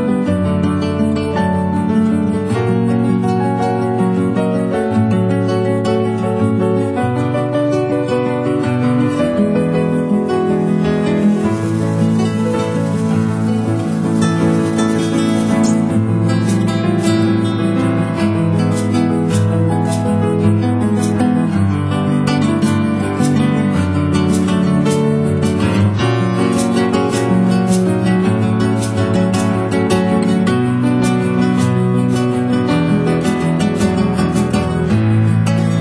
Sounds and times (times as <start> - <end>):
Music: 0.0 - 35.8.